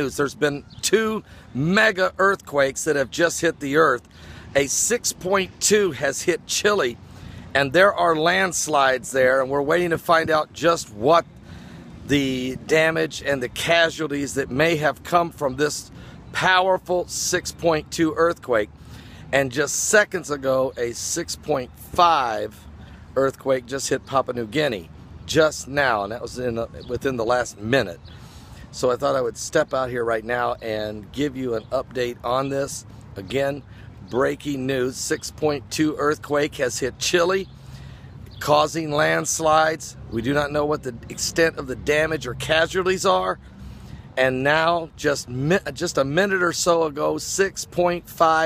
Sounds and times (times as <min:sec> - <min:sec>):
Speech: 0:00.0 - 0:07.0, 0:07.6 - 0:11.3, 0:12.1 - 0:18.7, 0:19.3 - 0:22.6, 0:23.2 - 0:28.0, 0:28.7 - 0:37.5, 0:38.4 - 0:43.4, 0:44.2 - 0:48.4.